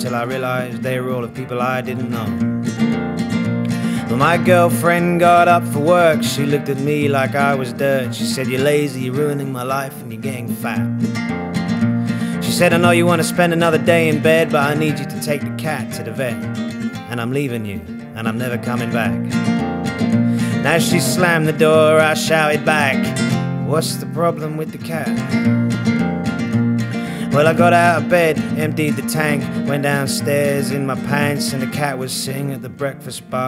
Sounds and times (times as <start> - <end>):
Music: 0.0 - 33.4.